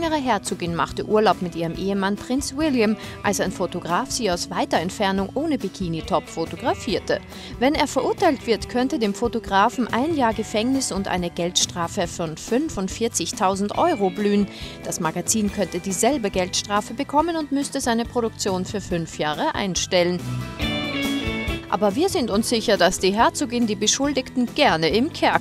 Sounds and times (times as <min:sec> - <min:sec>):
Speech: 0:00.0 - 0:20.2, 0:21.7 - 0:25.4
Music: 0:00.0 - 0:25.4.